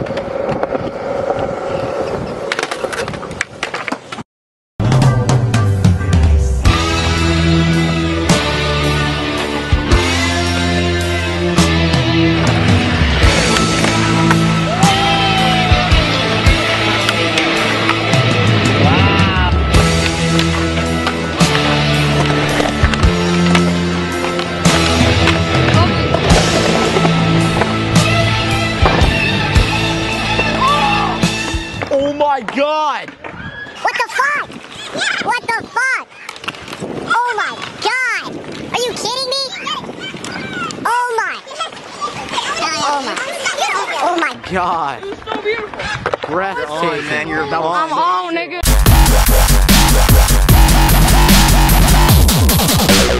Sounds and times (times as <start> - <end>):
Skateboard: 0.0 - 4.2, 13.2 - 40.8, 45.0 - 46.8.